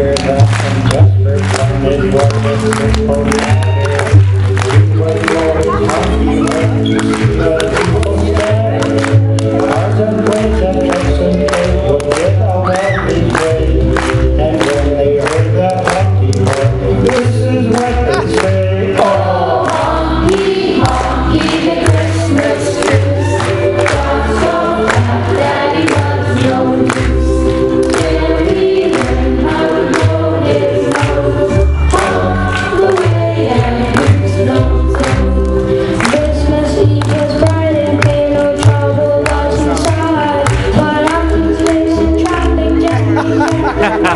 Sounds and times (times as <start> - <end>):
Music: 0.0 - 44.1.